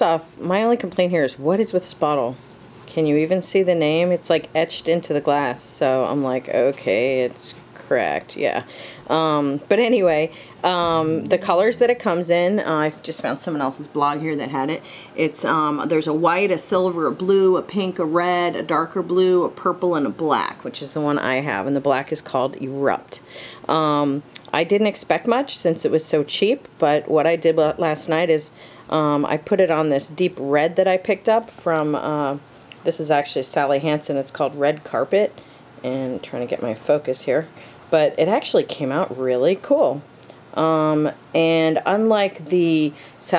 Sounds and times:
Speech: 0:00.0 - 0:43.3.

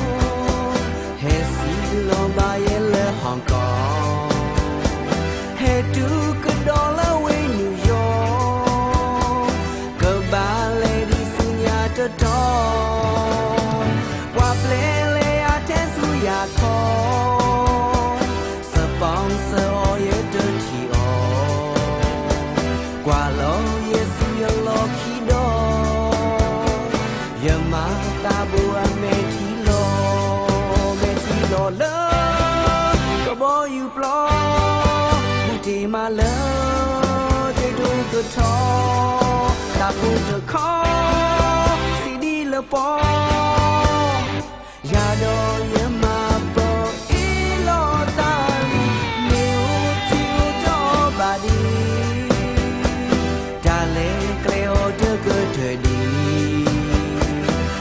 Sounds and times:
Music: 0:00.0 - 0:57.8.

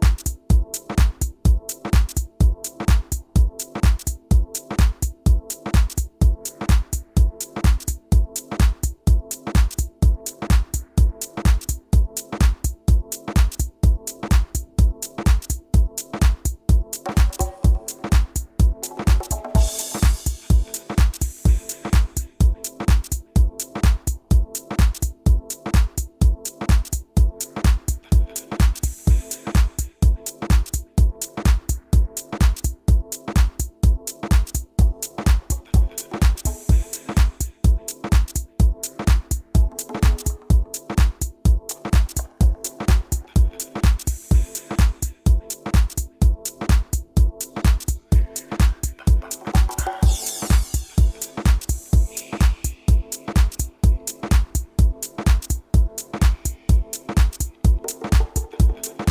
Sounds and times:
Music: 0:00.0 - 0:59.1.

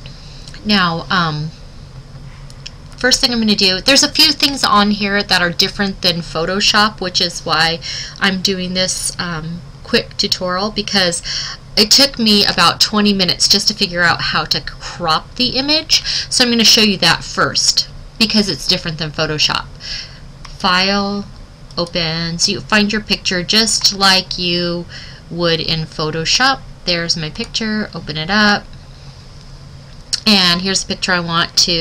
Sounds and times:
Speech: 0:00.6 - 0:01.6, 0:03.0 - 0:19.7, 0:20.5 - 0:28.7, 0:30.2 - 0:31.8.

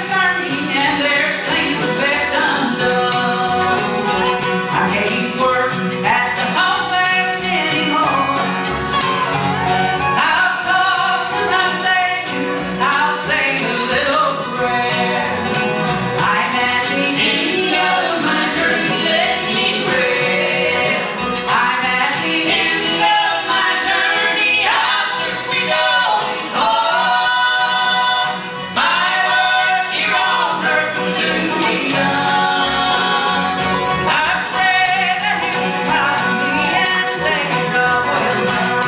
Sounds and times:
Female singing: 0:00.0 - 0:04.0, 0:04.7 - 0:08.6, 0:10.2 - 0:15.4, 0:16.2 - 0:38.8
Bluegrass: 0:00.0 - 0:38.8
Choir: 0:16.3 - 0:21.2, 0:21.9 - 0:36.2.

